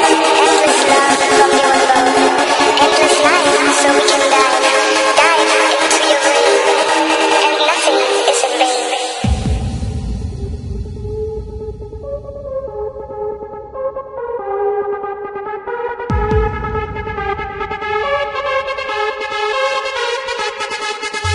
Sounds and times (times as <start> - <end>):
Electronic music: 0.0 - 21.3.